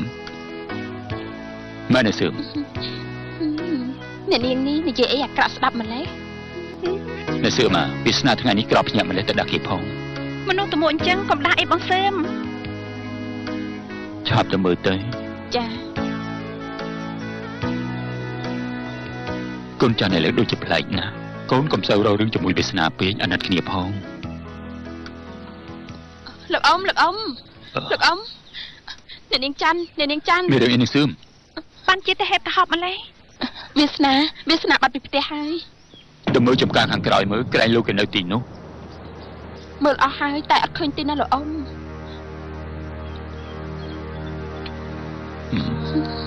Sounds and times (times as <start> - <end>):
Speech: 30.1 - 31.2.